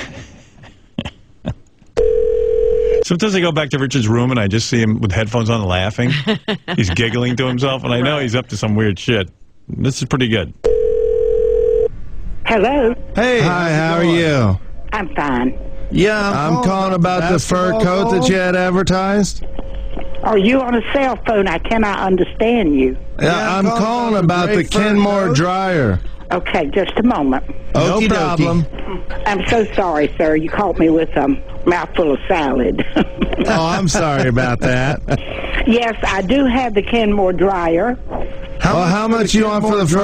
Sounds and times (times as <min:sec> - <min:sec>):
Speech: 0:03.1 - 0:10.6, 0:12.5 - 0:19.4, 0:20.2 - 0:38.0, 0:38.6 - 0:40.0.